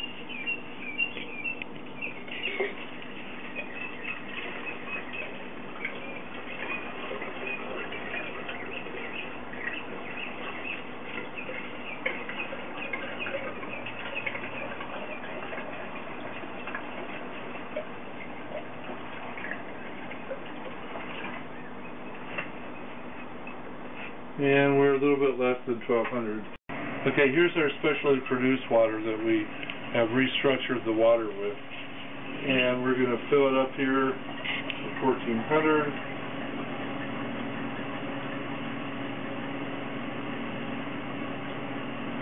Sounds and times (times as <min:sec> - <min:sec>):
Water: 0:00.0 - 0:42.2
Speech: 0:24.4 - 0:31.6, 0:32.4 - 0:34.2, 0:34.8 - 0:36.0.